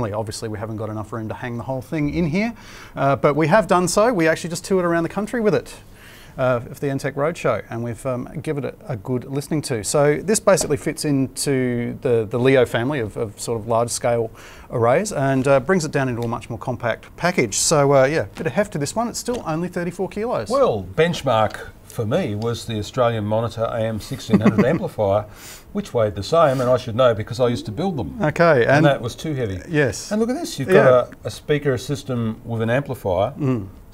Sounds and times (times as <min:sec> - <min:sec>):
Speech: 0:00.0 - 0:05.8, 0:06.4 - 0:33.7.